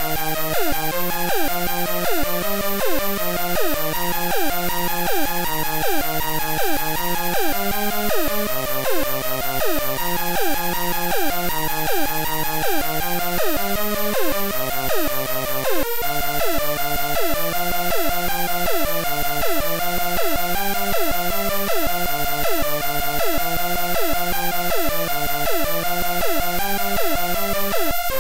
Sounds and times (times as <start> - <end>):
Music: 0.0 - 28.2.